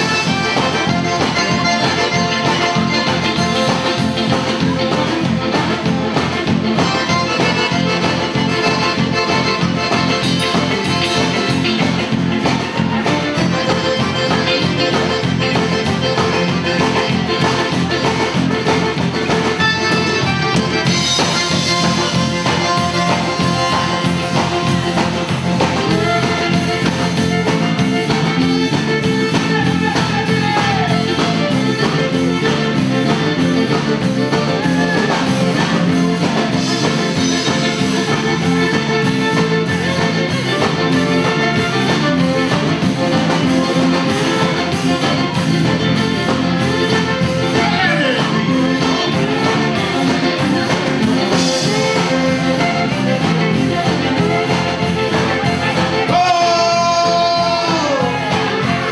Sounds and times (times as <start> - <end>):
Music: 0.0 - 58.9.